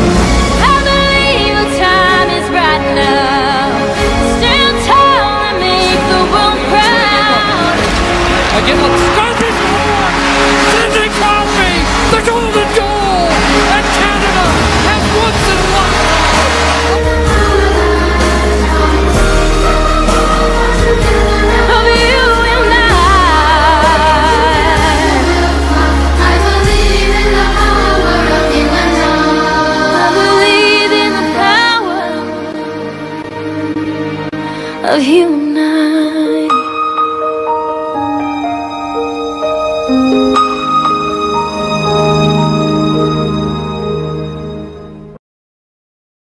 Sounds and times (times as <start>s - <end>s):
Music: 0.0s - 45.2s.